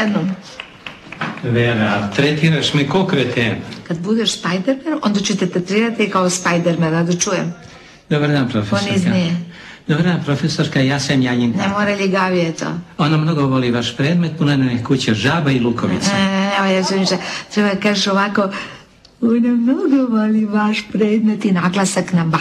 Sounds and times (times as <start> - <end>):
Speech: 1.4 - 3.7, 4.6 - 12.0.